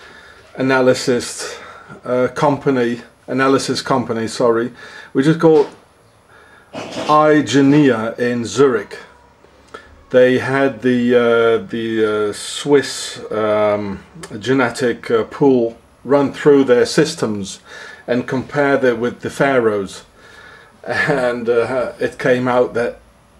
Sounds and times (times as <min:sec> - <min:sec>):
Speech: 0:00.5 - 0:05.8, 0:06.8 - 0:09.2, 0:10.1 - 0:20.1, 0:20.8 - 0:23.0.